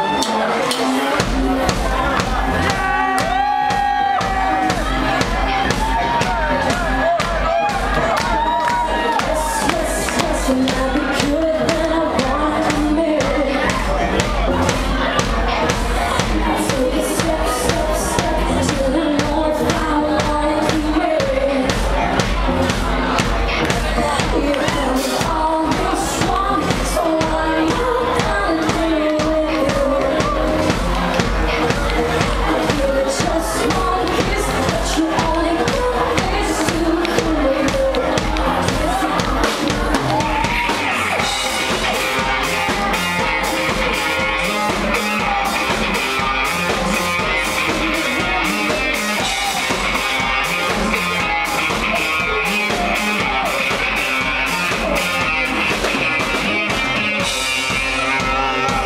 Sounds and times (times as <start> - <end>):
Music: 0.0 - 58.8.